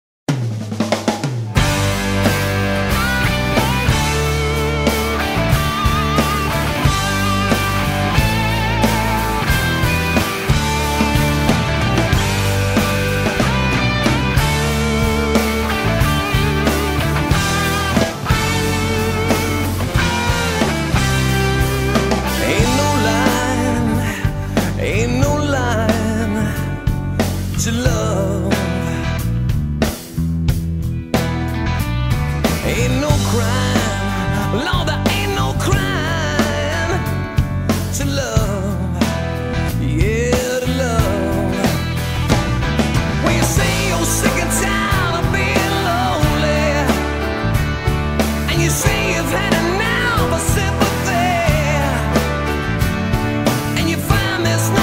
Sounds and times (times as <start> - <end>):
Bass drum: 0.3 - 54.8
Drum kit: 0.3 - 54.8.